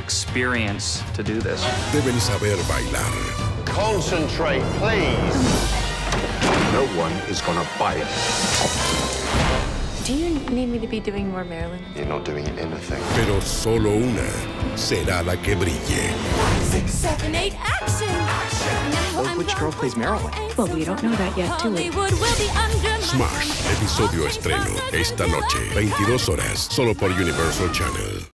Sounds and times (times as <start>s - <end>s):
Music: 0.0s - 28.3s
Speech: 23.1s - 28.3s.